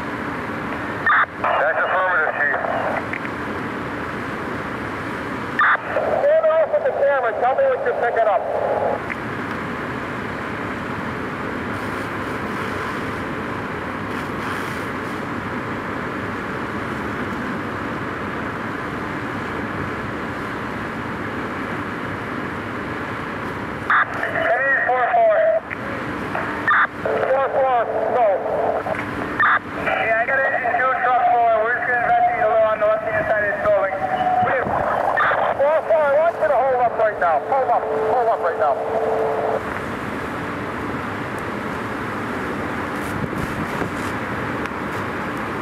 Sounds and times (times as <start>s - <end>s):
Outside, urban or manmade: 0.0s - 45.6s.